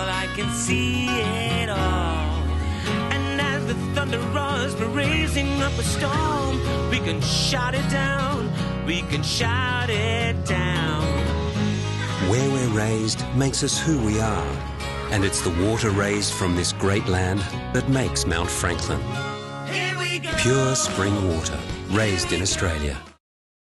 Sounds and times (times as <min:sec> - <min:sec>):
Music: 0:00.0 - 0:23.2
Speech: 0:12.2 - 0:19.1, 0:20.4 - 0:23.2.